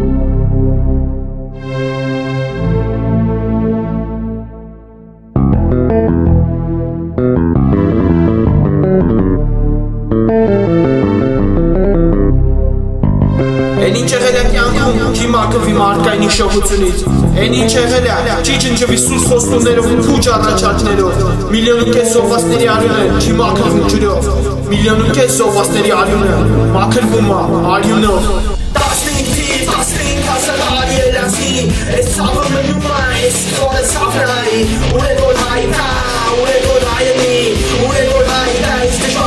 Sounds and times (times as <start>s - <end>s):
Heavy metal: 13.0s - 21.6s, 27.7s - 39.2s.